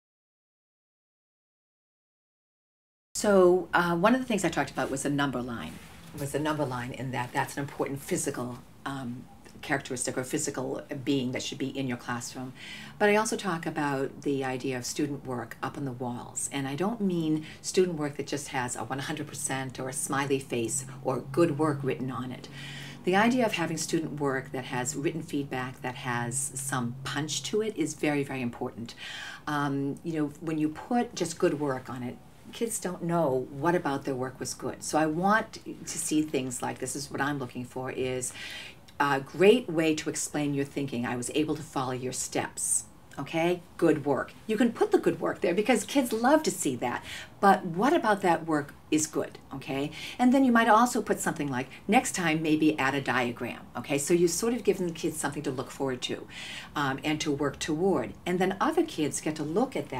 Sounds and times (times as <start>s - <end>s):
Speech: 3.2s - 59.9s.